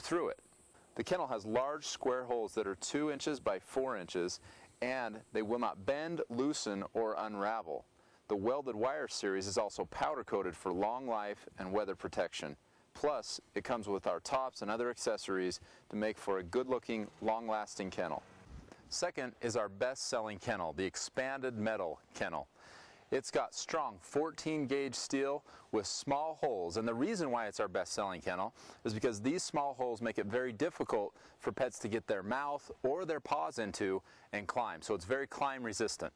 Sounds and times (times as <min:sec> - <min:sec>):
Speech: 0:00.0 - 0:00.4, 0:01.0 - 0:18.2, 0:18.9 - 0:36.1.